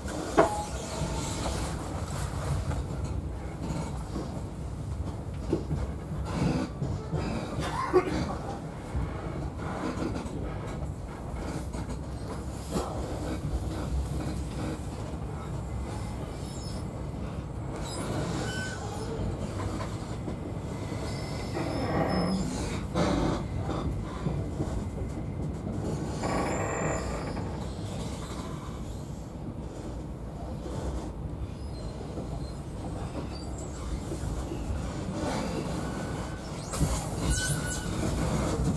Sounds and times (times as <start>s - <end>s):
Train: 0.0s - 38.7s.